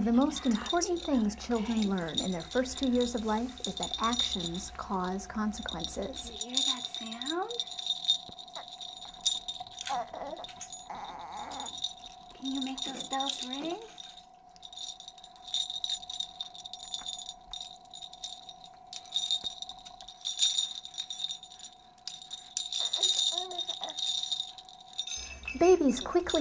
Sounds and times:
Speech: 0.0 - 7.6, 12.4 - 13.9, 25.6 - 26.4.

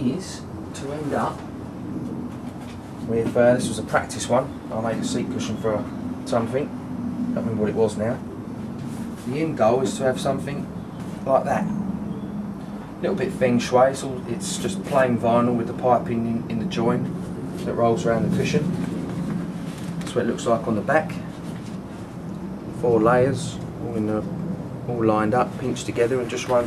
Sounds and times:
Speech: 0.0 - 1.5, 3.0 - 6.7, 7.4 - 8.2, 9.3 - 11.7, 13.0 - 18.8, 20.1 - 21.3, 22.8 - 24.3, 24.9 - 26.6.

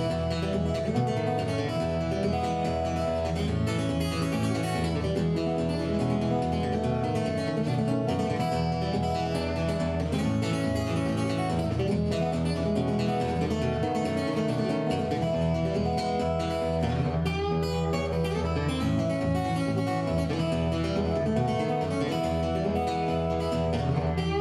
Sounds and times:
Music: 0.0 - 24.4.

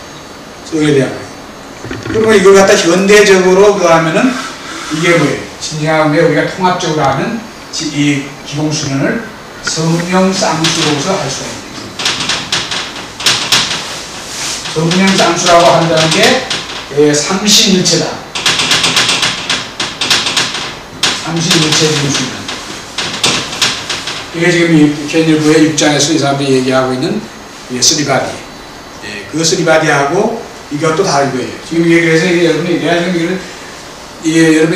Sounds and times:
Speech: 0.7 - 1.3, 2.1 - 11.8, 14.8 - 18.3, 21.2 - 22.5, 24.4 - 33.5, 34.2 - 34.7.

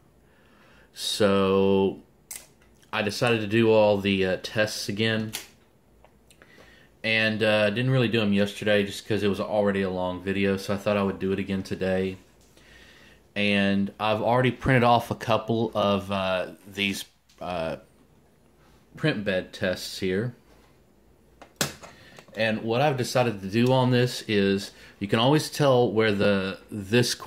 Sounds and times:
Speech: 1.0 - 2.1, 2.9 - 5.5, 7.0 - 12.3, 13.4 - 17.9, 19.0 - 20.4, 22.3 - 27.2.

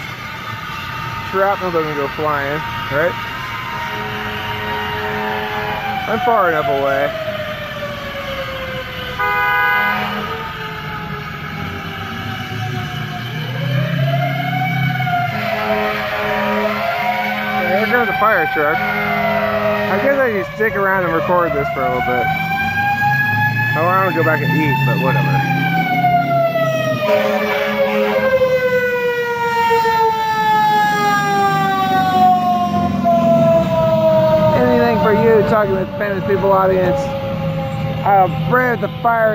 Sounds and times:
Outside, urban or manmade: 0.0 - 39.3
Police car (siren): 0.0 - 39.3
Speech: 1.3 - 3.2, 6.1 - 7.1, 17.6 - 18.8, 19.9 - 22.2, 23.8 - 25.4, 34.6 - 37.1, 38.0 - 39.3.

